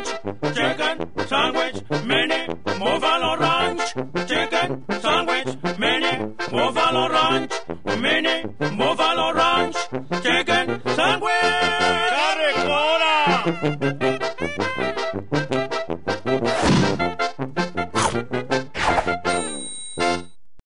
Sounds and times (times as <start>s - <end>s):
Music: 0.0s - 20.4s.